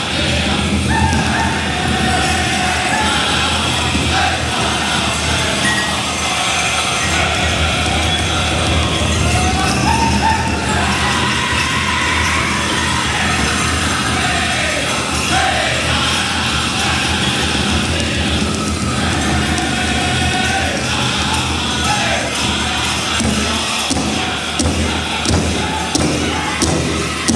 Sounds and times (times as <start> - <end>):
Music: 0.0 - 27.3.